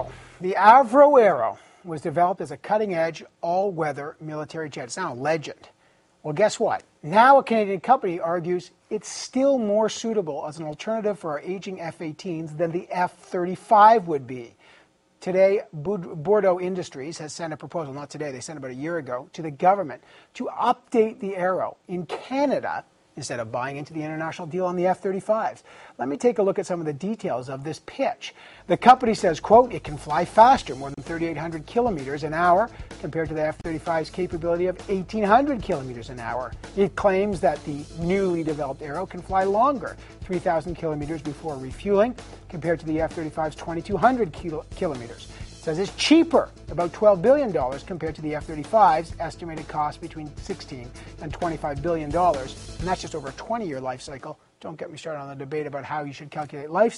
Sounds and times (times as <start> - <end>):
Music: 0.0 - 0.3, 28.7 - 54.2
Speech: 0.0 - 14.6, 15.2 - 56.9.